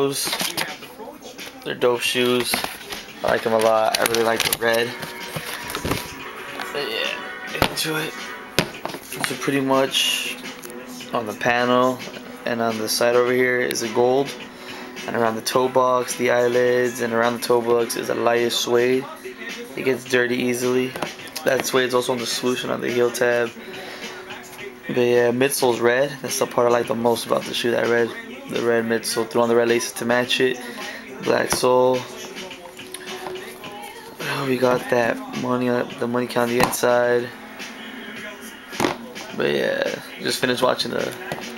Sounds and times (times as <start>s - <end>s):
Speech: 0.0s - 2.6s, 3.2s - 5.0s, 6.7s - 8.2s, 11.2s - 14.3s, 15.1s - 23.5s, 24.9s - 32.2s, 34.2s - 37.4s, 39.2s - 41.2s
Music: 0.0s - 41.5s.